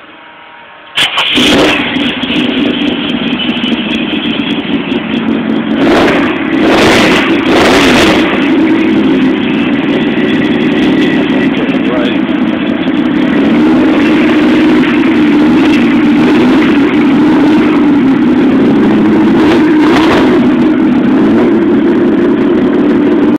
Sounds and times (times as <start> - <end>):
Truck: 0.0 - 23.3.